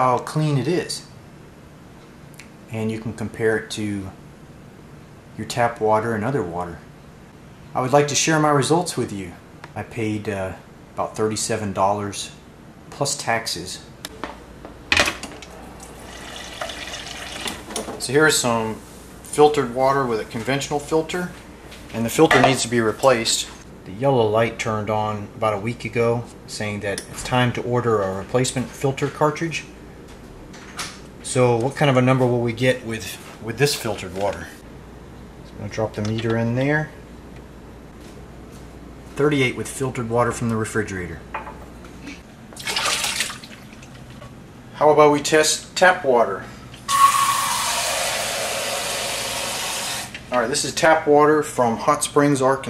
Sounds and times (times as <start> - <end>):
Speech: 0.0 - 1.1, 2.7 - 4.2, 5.4 - 6.9, 7.7 - 13.9, 18.0 - 29.7, 31.2 - 34.6, 35.5 - 37.0, 39.2 - 41.3, 44.8 - 46.5, 50.3 - 52.6
Water: 15.8 - 17.6, 42.6 - 44.2
Fill (with liquid): 15.9 - 17.5, 42.6 - 43.9.